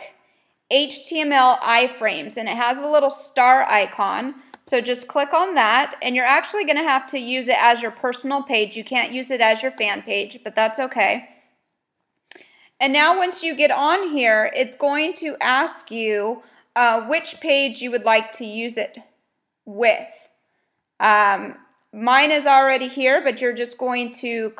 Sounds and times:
Speech: 0:00.7 - 0:11.3, 0:12.8 - 0:19.1, 0:19.7 - 0:20.3, 0:21.0 - 0:24.5.

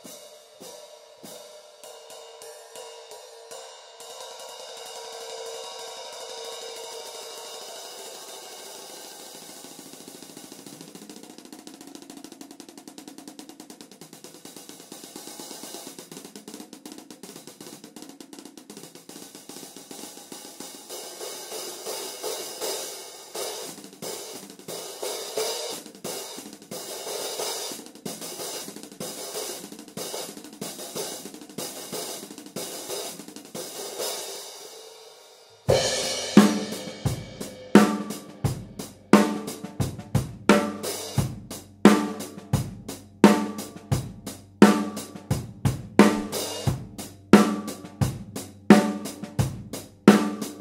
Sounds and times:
Drum kit: 0:00.0 - 0:50.6
Drum: 0:04.8 - 0:34.5, 0:35.6 - 0:50.6.

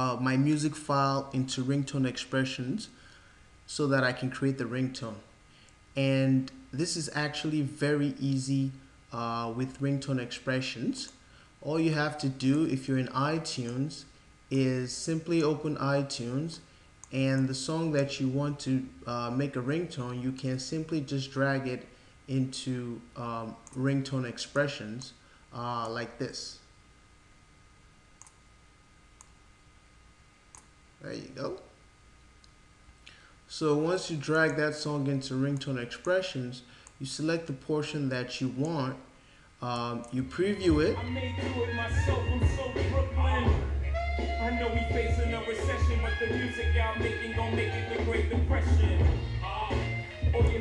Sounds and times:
Speech: 0:00.0 - 0:03.0, 0:03.7 - 0:05.3, 0:06.0 - 0:26.7, 0:31.0 - 0:31.8, 0:33.5 - 0:41.7
Clicking: 0:28.2 - 0:28.4, 0:30.5 - 0:30.7.

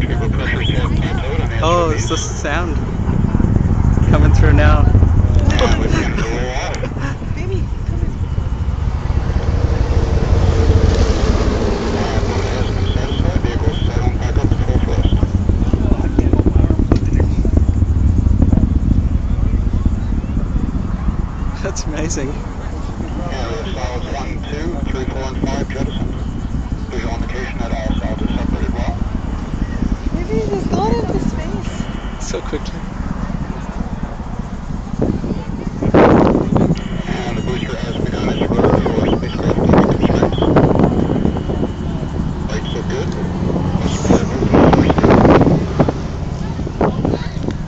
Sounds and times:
Speech: 0:00.0 - 0:02.9, 0:04.0 - 0:08.2, 0:11.9 - 0:17.6, 0:21.6 - 0:26.2, 0:26.8 - 0:32.8, 0:35.1 - 0:47.6
Wind noise (microphone): 0:00.0 - 0:47.6.

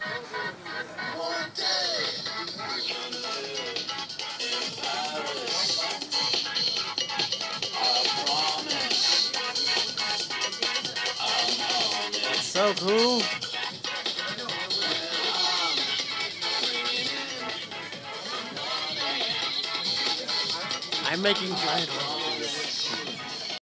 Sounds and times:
Music: 0:00.0 - 0:23.6
Speech: 0:12.3 - 0:13.3, 0:20.3 - 0:23.0.

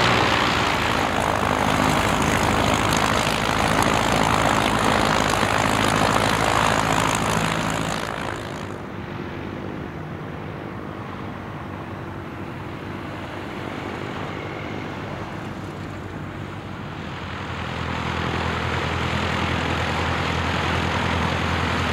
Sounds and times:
Fixed-wing aircraft, airplane: 0:00.0 - 0:21.9
Propeller, airscrew: 0:00.0 - 0:21.9.

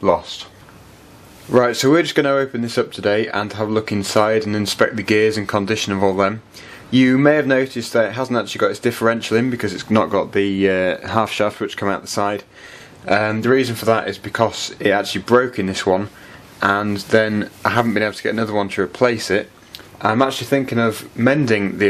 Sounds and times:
Speech: 0:00.0 - 0:00.6, 0:01.5 - 0:21.9.

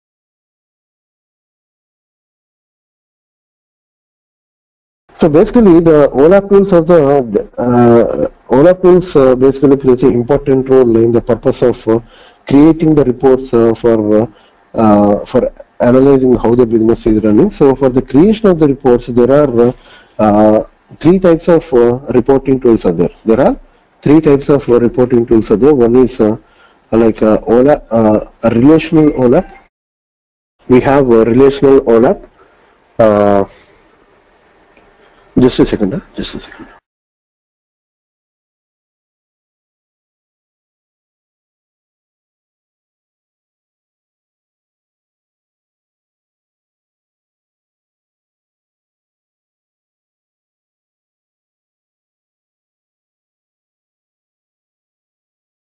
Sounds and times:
Speech: 0:05.2 - 0:29.7, 0:30.6 - 0:32.3, 0:33.0 - 0:33.7, 0:35.4 - 0:36.8.

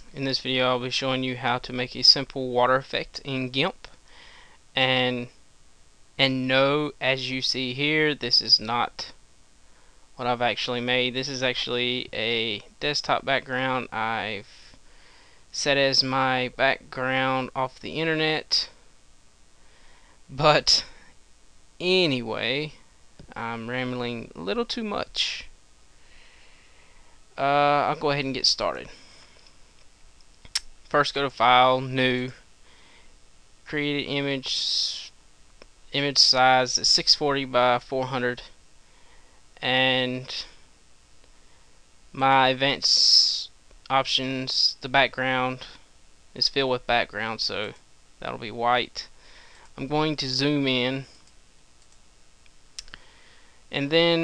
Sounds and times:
Speech: 0:00.0 - 0:03.9, 0:04.8 - 0:05.4, 0:06.2 - 0:09.2, 0:10.2 - 0:14.8, 0:15.5 - 0:18.8, 0:20.3 - 0:21.0, 0:21.8 - 0:25.5, 0:27.4 - 0:29.0, 0:30.9 - 0:32.4, 0:33.7 - 0:35.2, 0:35.9 - 0:38.6, 0:39.6 - 0:40.6, 0:42.1 - 0:45.8, 0:46.4 - 0:49.2, 0:49.8 - 0:51.2, 0:53.7 - 0:54.2.

